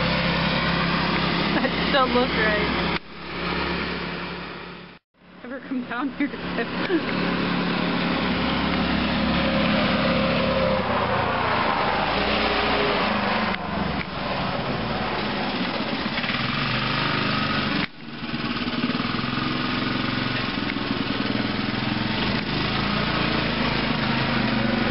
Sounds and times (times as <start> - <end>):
Car: 0.0 - 24.9.